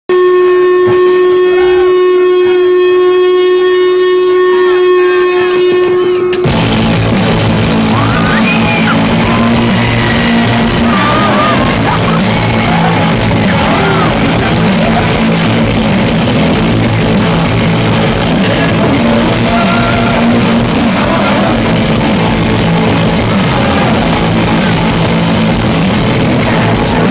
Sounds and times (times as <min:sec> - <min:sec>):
Musical instrument: 0:00.1 - 0:27.1
Rock music: 0:04.4 - 0:27.1.